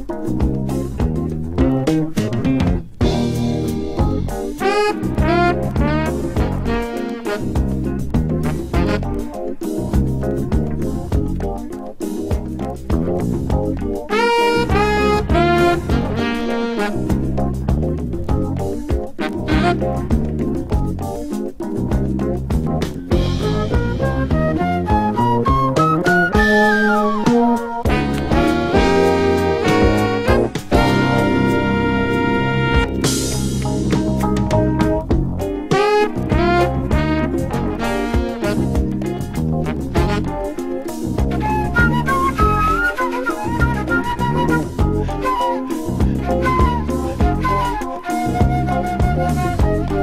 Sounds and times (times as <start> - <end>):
Music: 0.0 - 50.0.